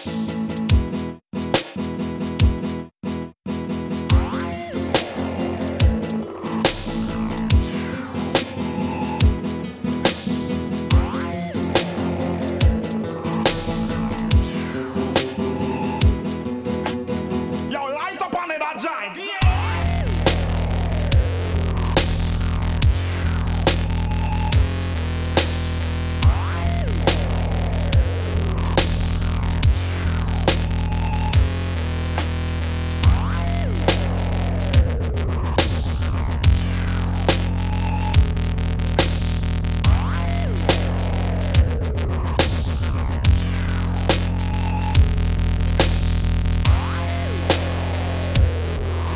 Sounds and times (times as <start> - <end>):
Dubstep: 0.0 - 17.7, 19.4 - 49.1.